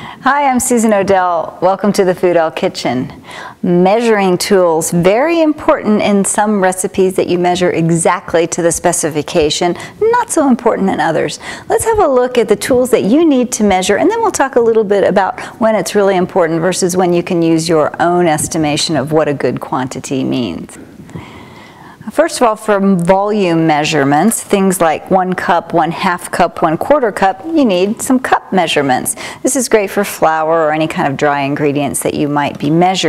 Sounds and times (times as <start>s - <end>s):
Speech: 0.2s - 20.8s, 22.1s - 33.0s.